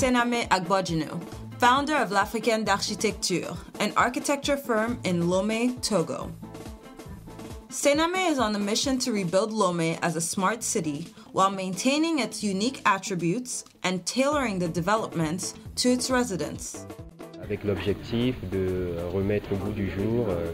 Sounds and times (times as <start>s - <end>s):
Speech: 0.0s - 6.3s, 7.8s - 16.8s, 17.4s - 20.5s
Music: 0.0s - 20.5s.